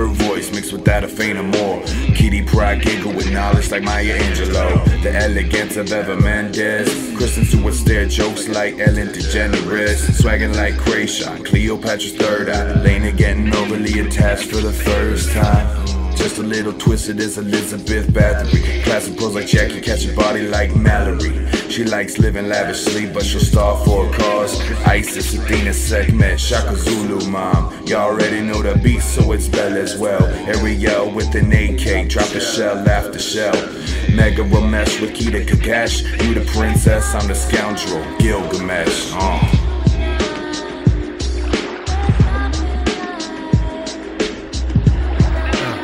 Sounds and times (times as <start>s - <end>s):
Dance music: 0.0s - 45.8s.